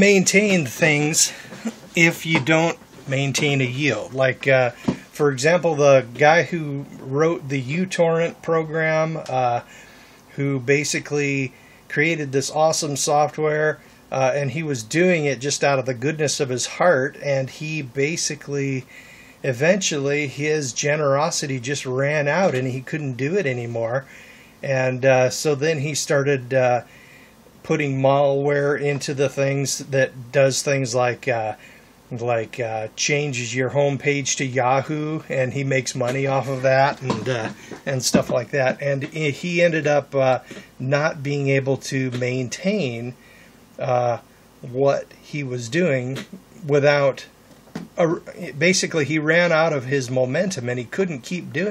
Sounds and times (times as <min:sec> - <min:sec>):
Speech: 0:00.0 - 0:09.7, 0:10.3 - 0:26.9, 0:27.6 - 0:43.2, 0:43.8 - 0:47.3, 0:48.0 - 0:51.7
Inside, small room: 0:00.0 - 0:51.7.